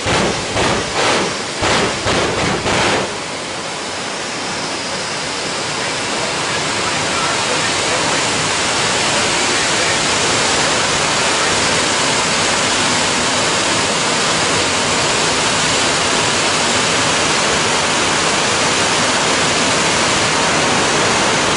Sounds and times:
Vehicle: 0:00.0 - 0:21.5.

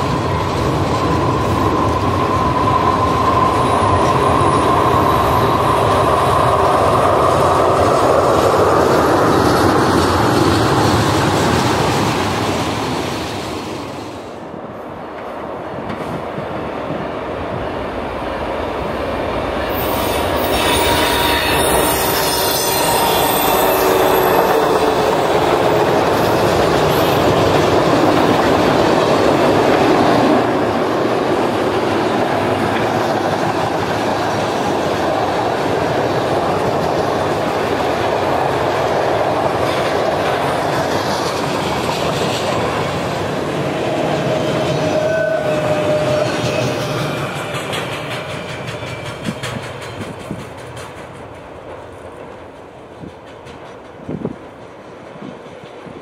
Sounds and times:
Railroad car, train wagon: 0:00.0 - 0:56.0
Train: 0:00.0 - 0:56.0
Clickety-clack: 0:07.4 - 0:12.7, 0:15.2 - 0:17.0, 0:31.5 - 0:43.2, 0:45.8 - 0:56.0.

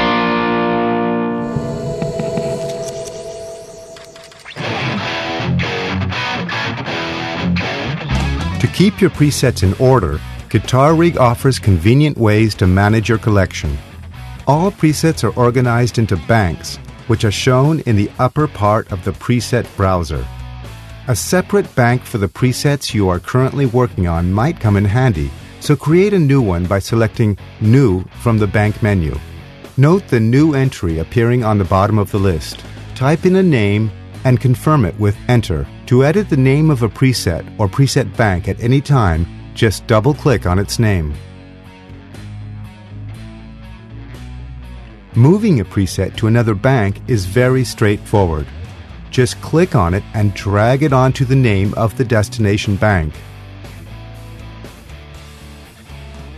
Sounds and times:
Speech: 0:08.4 - 0:13.9, 0:14.5 - 0:20.3, 0:21.1 - 0:29.2, 0:29.8 - 0:41.2, 0:45.2 - 0:53.2.

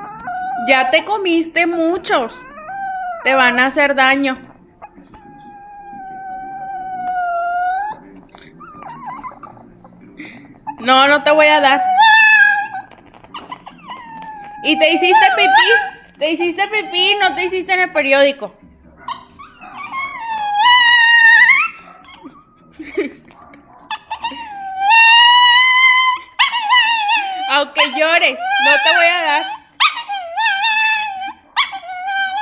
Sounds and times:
Speech: 0:00.0 - 0:02.5, 0:03.2 - 0:06.6, 0:07.6 - 0:12.7, 0:13.7 - 0:19.1, 0:27.2 - 0:29.6
Dog: 0:00.0 - 0:03.8, 0:04.8 - 0:09.9, 0:10.6 - 0:16.0, 0:19.0 - 0:22.6, 0:23.3 - 0:32.4.

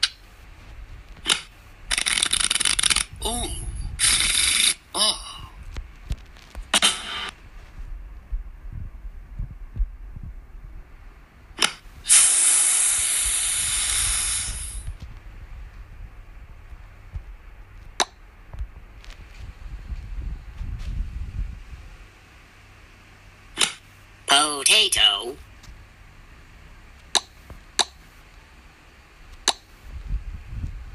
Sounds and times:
Steam: 0:12.0 - 0:14.9.

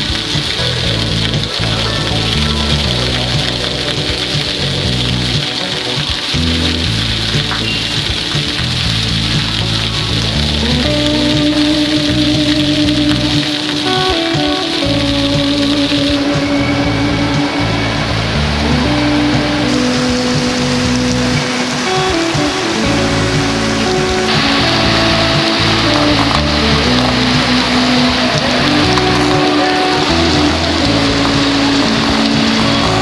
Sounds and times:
Music: 0:00.0 - 0:33.0
Rain on surface: 0:00.0 - 0:33.0.

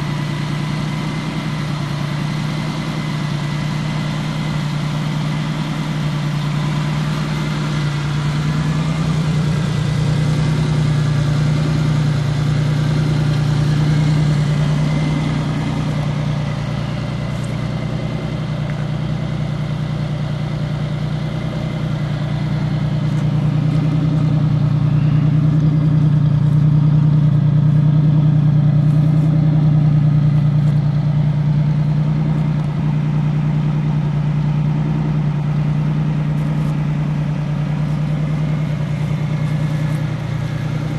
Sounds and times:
Vehicle: 0:00.0 - 0:40.9.

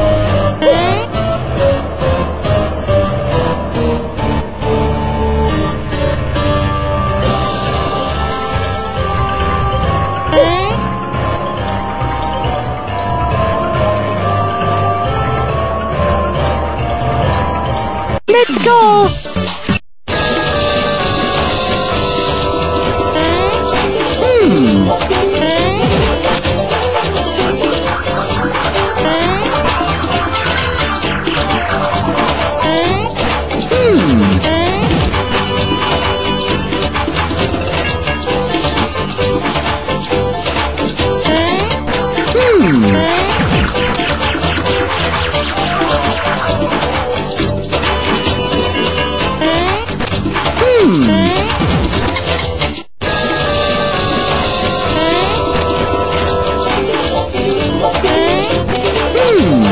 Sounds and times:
Music: 0:00.0 - 0:59.7
Speech: 0:18.3 - 0:19.2.

